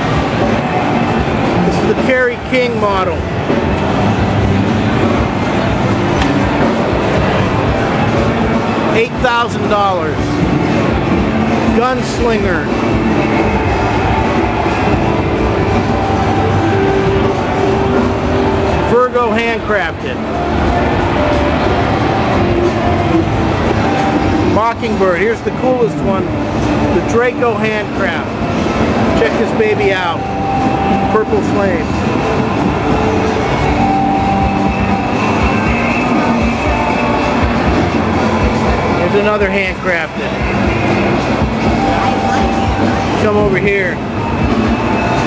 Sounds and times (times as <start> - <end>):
Guitar: 0.0 - 45.2
Speech: 1.7 - 3.2, 8.9 - 10.3, 11.7 - 12.7, 18.9 - 20.2, 24.5 - 26.3, 26.9 - 28.4, 29.2 - 30.2, 31.1 - 31.9, 38.9 - 40.6, 41.7 - 44.0.